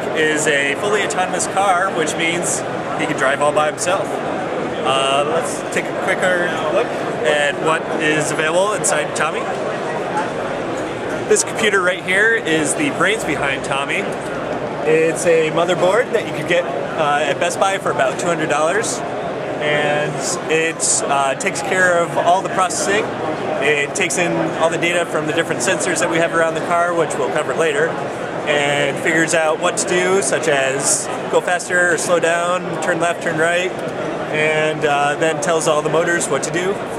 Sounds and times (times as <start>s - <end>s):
Speech: 0.0s - 4.2s, 4.8s - 10.4s, 11.3s - 14.1s, 14.8s - 19.0s, 19.6s - 36.9s.